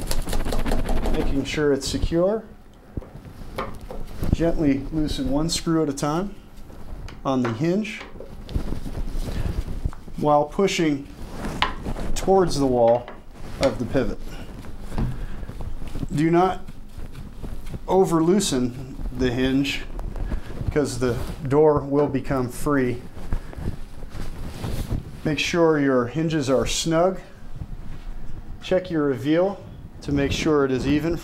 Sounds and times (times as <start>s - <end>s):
Speech: 1.1s - 2.6s, 4.3s - 6.4s, 7.2s - 8.2s, 10.2s - 11.1s, 12.2s - 14.4s, 16.1s - 16.7s, 17.9s - 19.9s, 20.7s - 23.1s, 25.2s - 27.4s, 28.6s - 31.2s.